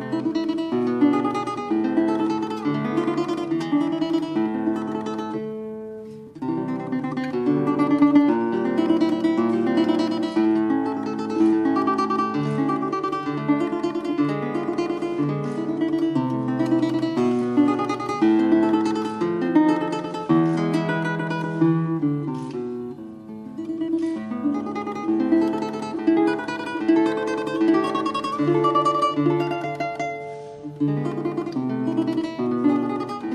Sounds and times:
Guitar: 0.0 - 33.3.

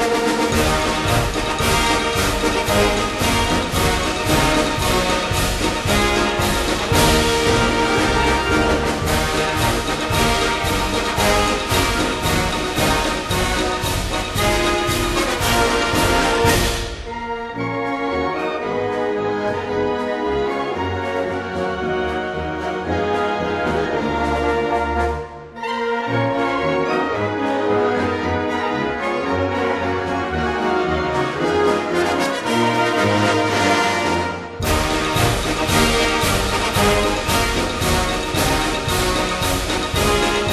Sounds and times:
Orchestra: 0.0 - 40.5.

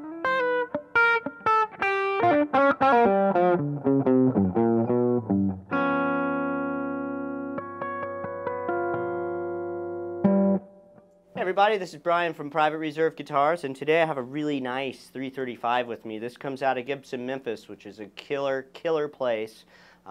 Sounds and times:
Electric guitar: 0.0 - 11.3
Speech: 11.4 - 20.1.

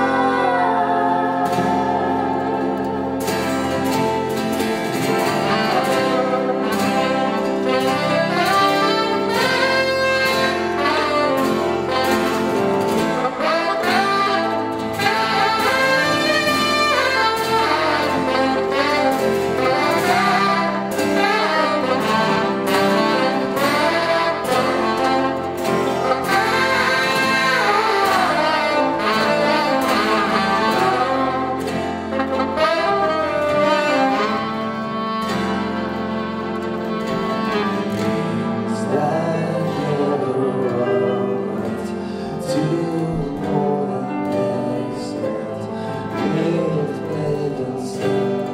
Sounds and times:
Saxophone: 0.0 - 48.5.

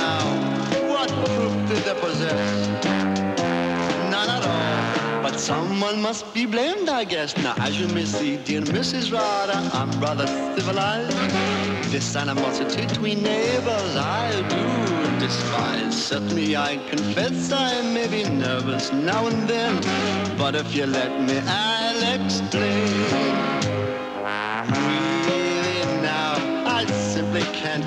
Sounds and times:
Rock and roll: 0.0 - 27.8.

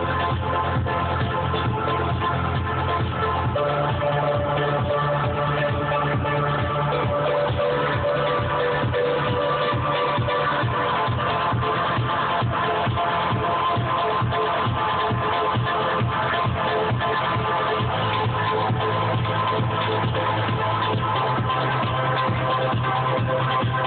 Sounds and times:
Music: 0.0 - 23.8.

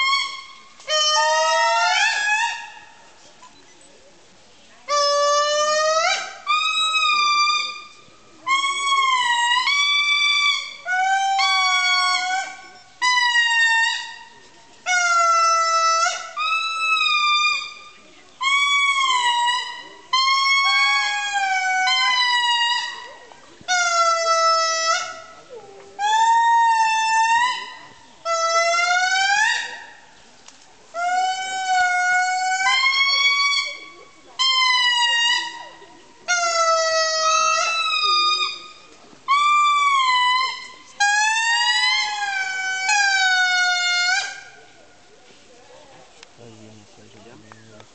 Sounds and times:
Outside, rural or natural: 0.0 - 47.9.

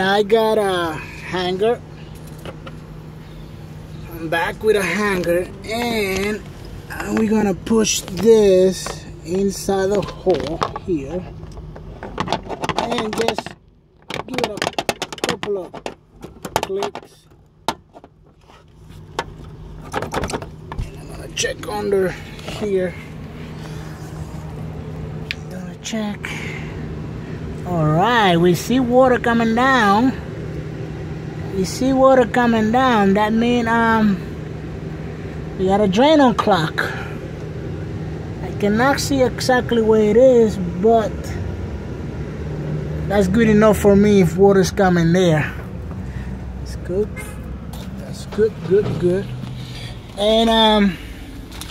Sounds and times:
Speech: 0.0 - 1.8, 4.1 - 11.3, 12.7 - 13.6, 14.2 - 14.7, 15.3 - 15.8, 16.6 - 17.2, 20.8 - 23.0, 25.4 - 26.4, 27.7 - 30.2, 31.5 - 34.2, 35.6 - 37.0, 38.4 - 41.4, 43.1 - 45.6, 46.7 - 47.3, 48.0 - 49.3, 50.2 - 51.0.

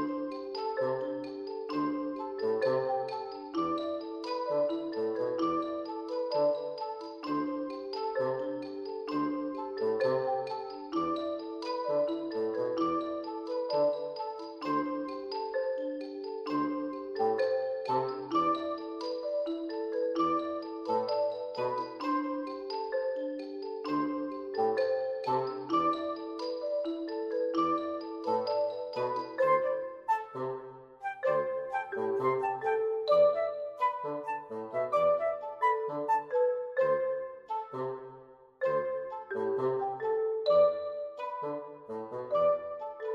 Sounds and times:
Music: 0.0 - 43.1.

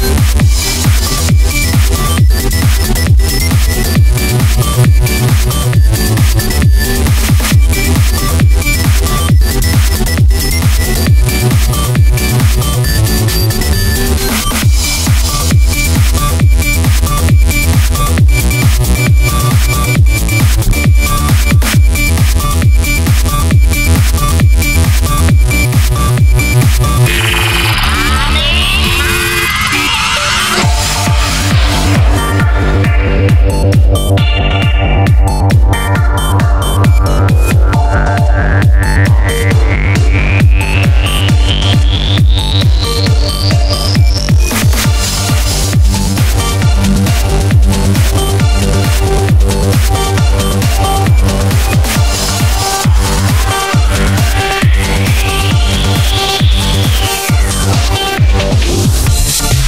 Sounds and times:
Trance music: 0.0 - 59.6.

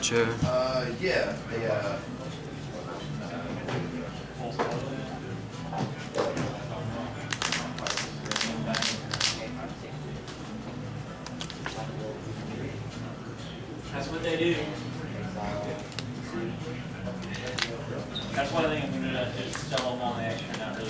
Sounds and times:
Speech: 0.0 - 10.3, 11.7 - 20.9
Music: 0.0 - 20.9.

